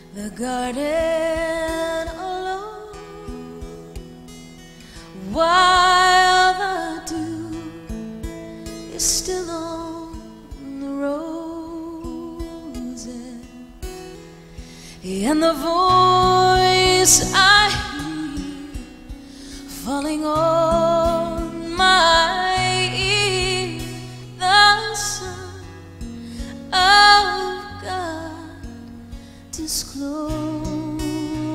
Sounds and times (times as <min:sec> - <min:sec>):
Music: 0:00.0 - 0:31.5.